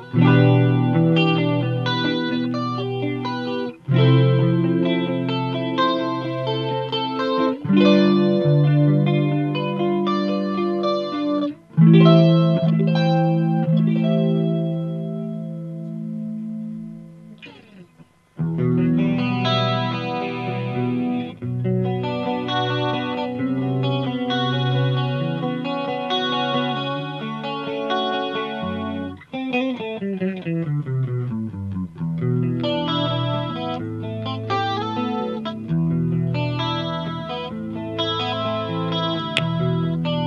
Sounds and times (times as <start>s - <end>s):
Distortion: 0.0s - 40.2s.